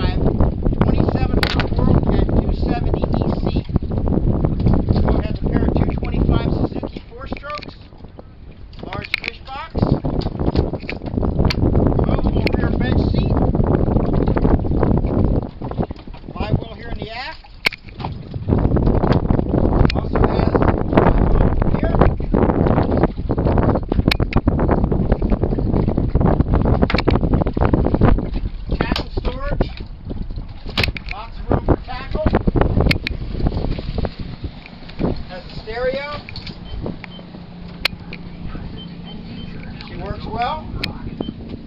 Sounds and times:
Speech: 0.8s - 3.7s, 5.0s - 7.7s, 8.8s - 10.0s, 12.0s - 13.4s, 16.4s - 17.4s, 20.0s - 20.6s, 28.8s - 29.8s, 31.1s - 32.4s, 35.3s - 36.2s, 38.5s - 41.2s.

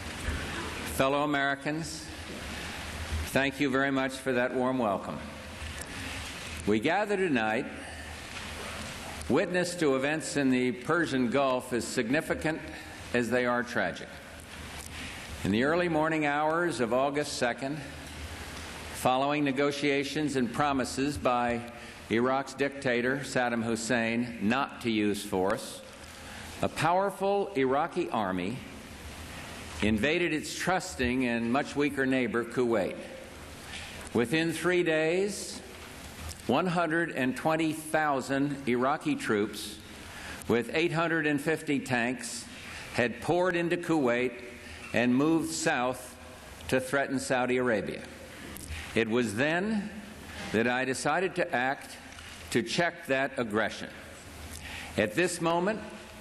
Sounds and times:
Male speech, man speaking: 0.9s - 2.1s, 3.3s - 5.3s, 6.6s - 7.8s, 9.3s - 14.2s, 15.5s - 17.9s, 19.0s - 25.9s, 26.6s - 28.7s, 29.8s - 33.2s, 34.2s - 35.6s, 36.5s - 39.8s, 40.5s - 44.4s, 45.0s - 48.1s, 49.0s - 50.0s, 50.6s - 54.0s, 55.0s - 56.0s.

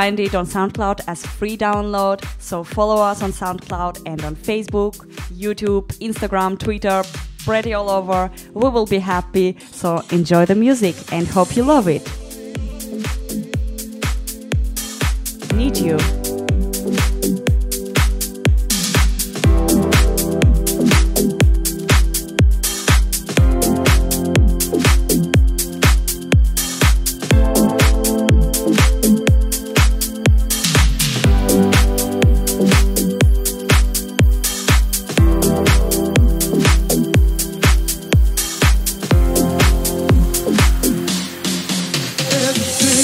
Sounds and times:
Speech: 0.0s - 12.1s, 15.5s - 16.1s
Music: 0.0s - 43.0s.

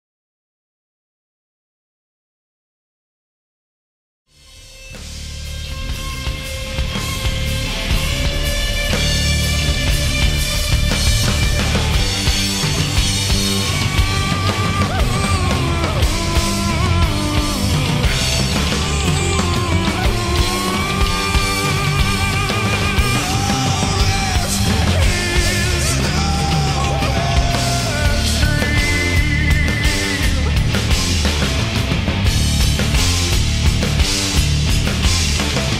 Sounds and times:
Music: 4.3s - 35.7s.

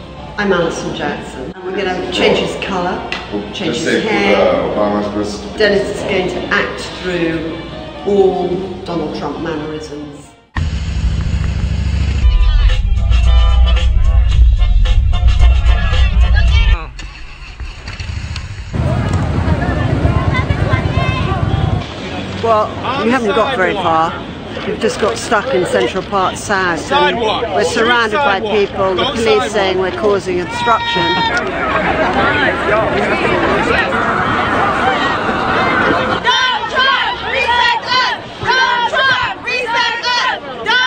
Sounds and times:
Music: 0.0s - 1.6s, 4.4s - 18.4s.

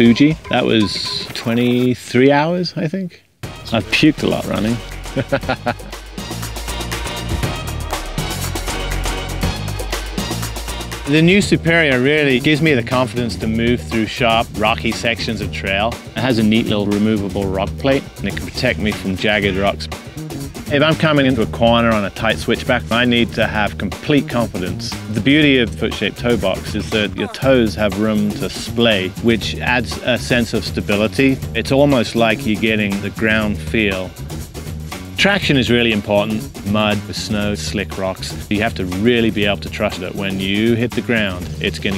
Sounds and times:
Music: 0.0s - 2.0s, 3.4s - 41.9s
Speech: 0.0s - 4.8s, 11.1s - 20.0s, 20.7s - 34.2s, 35.2s - 41.9s.

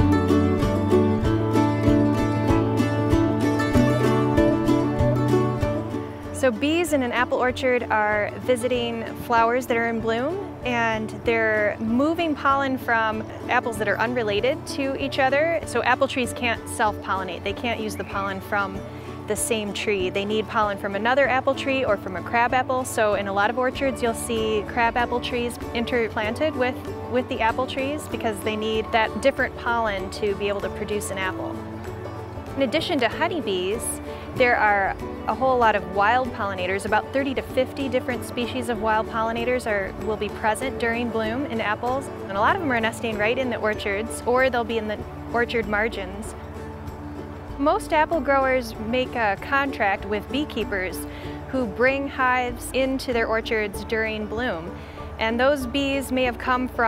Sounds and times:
Music: 0.0s - 56.8s
Speech: 6.4s - 31.6s, 32.6s - 46.3s, 47.6s - 56.8s.

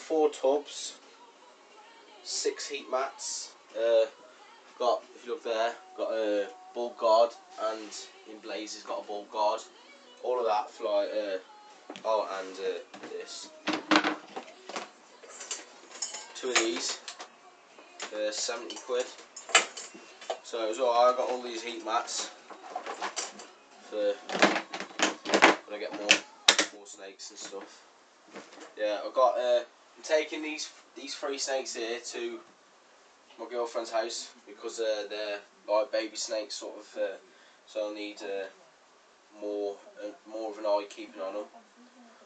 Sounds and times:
Music: 0.0s - 28.7s
Inside, small room: 0.0s - 42.2s
Speech: 2.3s - 4.1s, 4.8s - 11.4s, 12.0s - 13.6s, 18.1s - 19.2s, 20.5s - 22.3s, 25.7s - 27.8s, 28.8s - 32.4s, 33.4s - 38.6s, 39.4s - 42.2s.

